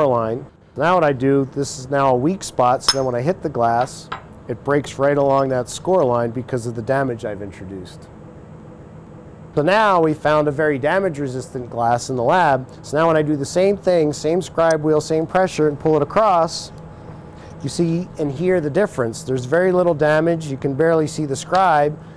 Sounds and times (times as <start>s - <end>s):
Speech: 0.0s - 8.1s, 9.6s - 16.8s, 17.6s - 22.0s.